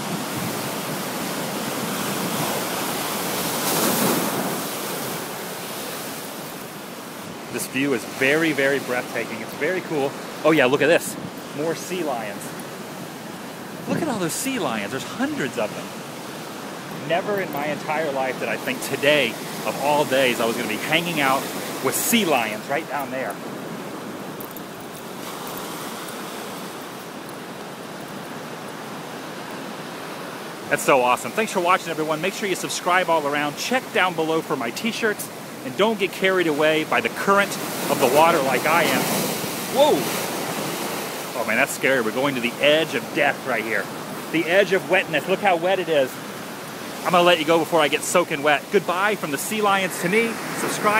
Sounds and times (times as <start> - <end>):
Waves, surf: 0.0 - 50.9
Wind: 0.0 - 50.9.